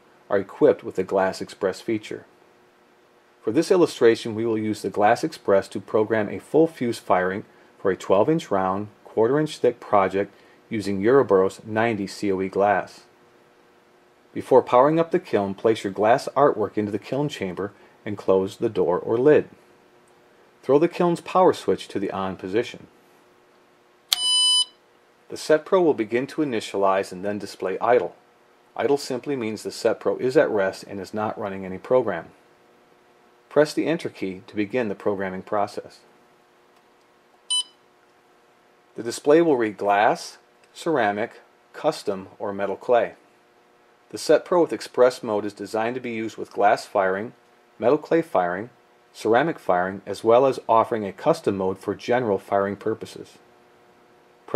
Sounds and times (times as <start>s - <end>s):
Speech: 0.3s - 2.3s, 3.4s - 13.1s, 14.3s - 19.6s, 20.6s - 22.9s, 25.3s - 28.2s, 28.8s - 32.4s, 33.5s - 36.1s, 39.0s - 43.2s, 44.1s - 53.4s
Beep, bleep: 24.2s - 24.8s, 37.5s - 37.8s.